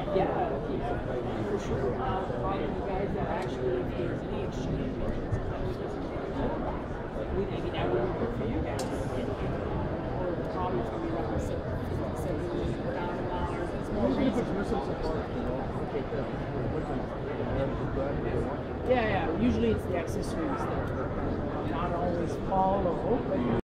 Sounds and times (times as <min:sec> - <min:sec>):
Speech: 0:00.0 - 0:23.6.